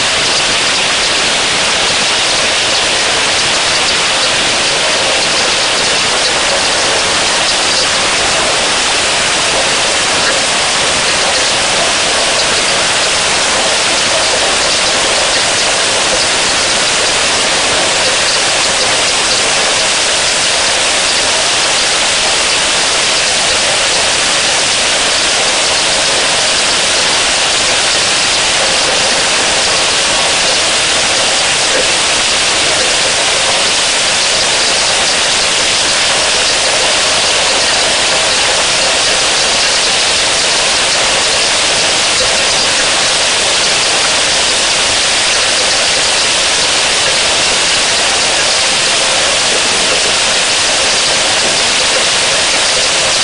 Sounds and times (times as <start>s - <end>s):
Rain on surface: 0.0s - 53.2s.